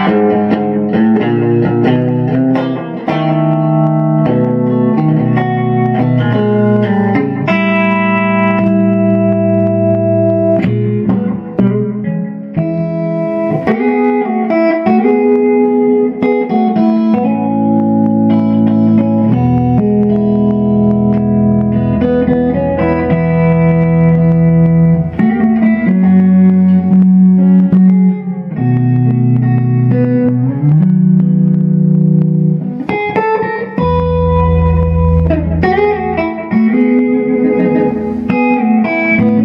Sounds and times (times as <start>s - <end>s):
Guitar: 0.0s - 39.4s.